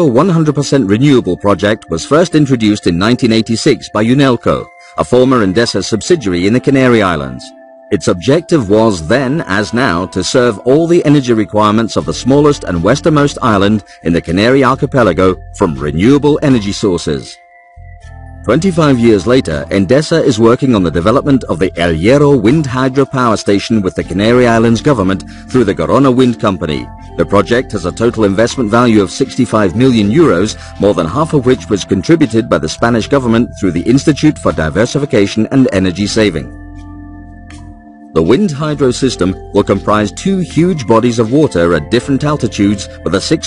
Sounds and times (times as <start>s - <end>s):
Speech: 0.0s - 17.4s, 18.5s - 36.5s, 38.2s - 43.4s
Music: 0.0s - 43.4s.